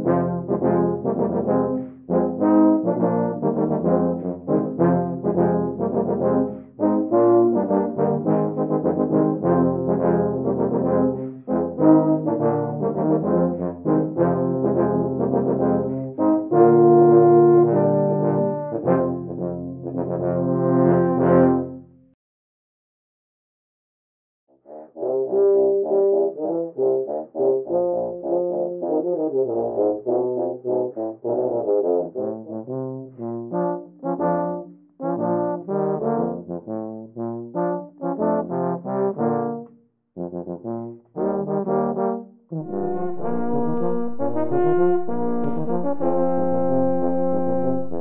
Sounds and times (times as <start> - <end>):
Music: 0.0 - 22.2, 24.5 - 48.0.